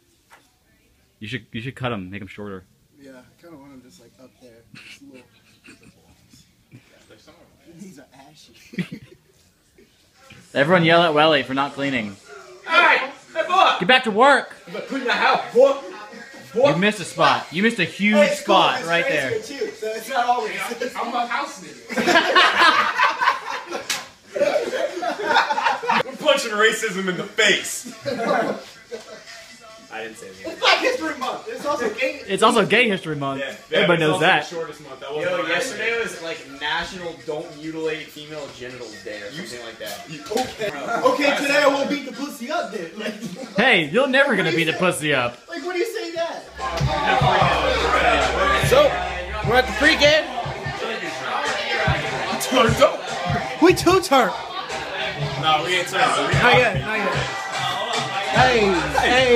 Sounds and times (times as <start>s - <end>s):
Slap, smack: 23.9s - 24.1s
Music: 26.0s - 43.3s, 44.3s - 59.3s.